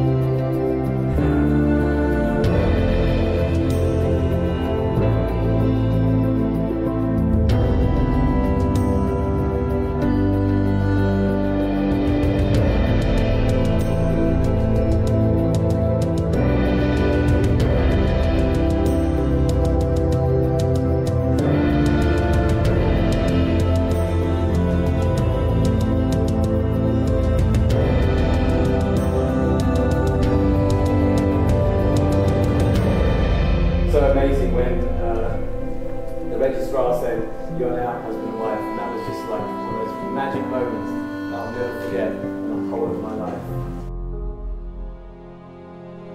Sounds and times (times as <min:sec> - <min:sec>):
Music: 0:00.0 - 0:46.1
Speech: 0:33.9 - 0:35.6, 0:36.2 - 0:43.7.